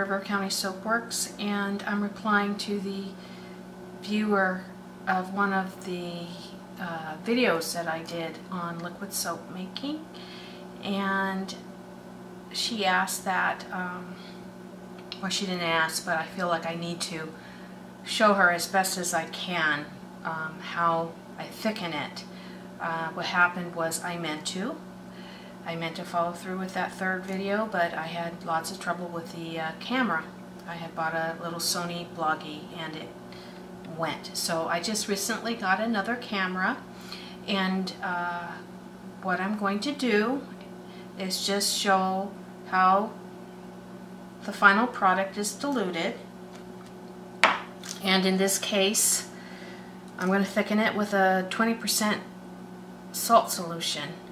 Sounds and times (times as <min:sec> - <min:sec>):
Speech: 0:00.0 - 0:03.2, 0:04.0 - 0:10.1, 0:10.8 - 0:11.7, 0:12.5 - 0:14.3, 0:15.2 - 0:17.4, 0:18.1 - 0:24.8, 0:25.7 - 0:33.2, 0:33.9 - 0:40.5, 0:41.2 - 0:43.2, 0:44.4 - 0:46.3, 0:47.9 - 0:49.3, 0:50.2 - 0:52.3, 0:53.2 - 0:54.2.